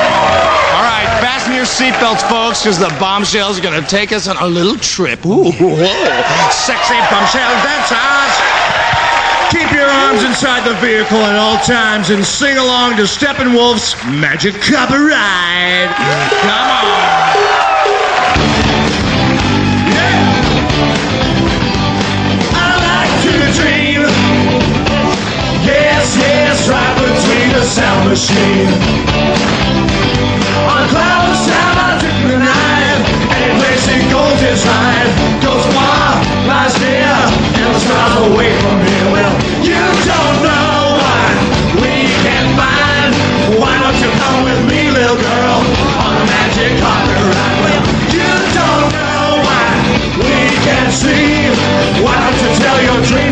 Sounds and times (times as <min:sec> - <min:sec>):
Music: 0:00.0 - 0:04.4, 0:06.4 - 0:53.3
Male singing: 0:22.5 - 0:24.4, 0:25.6 - 0:28.8, 0:30.6 - 0:53.3.